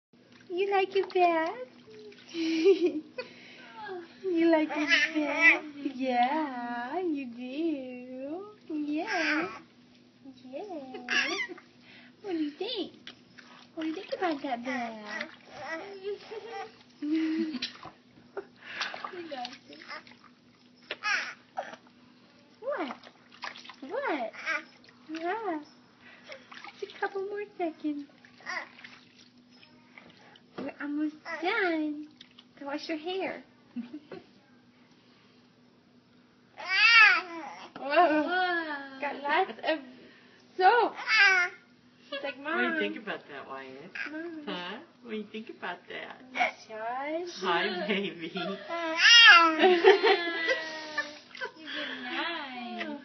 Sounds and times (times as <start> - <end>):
Babbling: 9.0 - 9.6, 10.8 - 11.6, 14.8 - 16.7, 21.0 - 21.8, 24.3 - 24.7, 28.4 - 28.8, 36.6 - 37.8, 41.0 - 41.6, 48.7 - 49.6.